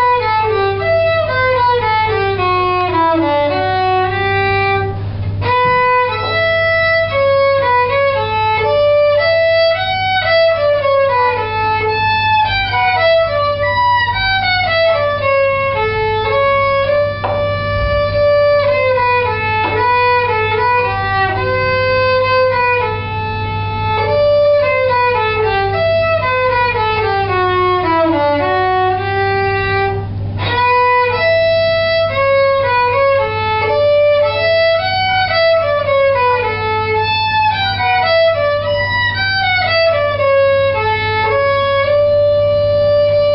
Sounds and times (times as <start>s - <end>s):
Violin, fiddle: 0.0s - 43.3s.